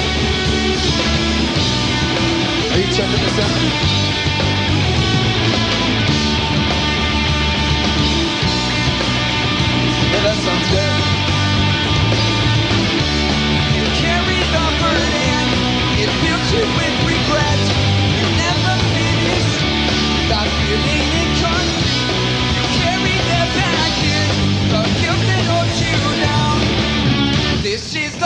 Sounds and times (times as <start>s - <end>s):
Rock music: 0.0s - 28.2s
Speech: 2.7s - 3.8s, 10.1s - 11.1s.